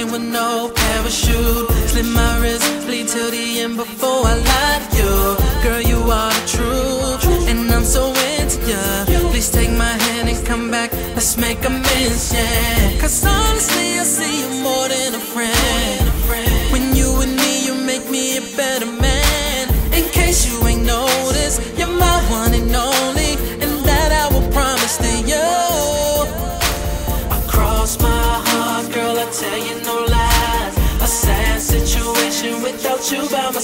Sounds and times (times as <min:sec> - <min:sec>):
Pop music: 0:00.0 - 0:33.6.